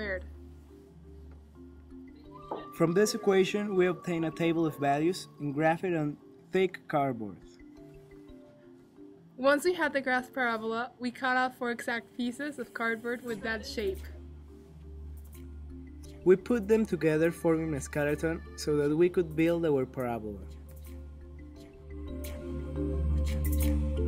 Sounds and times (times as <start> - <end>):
Music: 0.0 - 24.0.